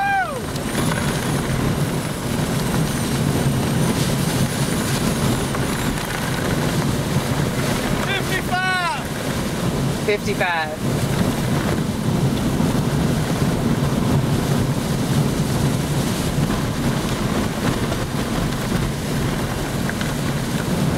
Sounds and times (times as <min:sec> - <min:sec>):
Wind noise (microphone): 0:00.0 - 0:20.9.